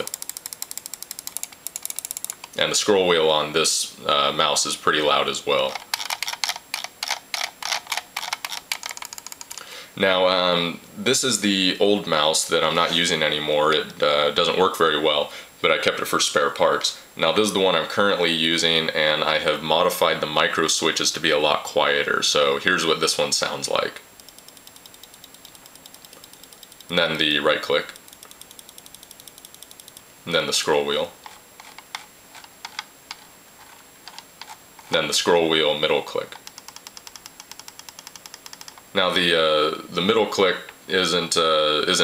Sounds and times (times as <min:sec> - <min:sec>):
Speech: 0:02.6 - 0:05.8, 0:10.0 - 0:24.1, 0:26.9 - 0:28.0, 0:30.2 - 0:31.2, 0:34.9 - 0:36.4, 0:38.9 - 0:42.0.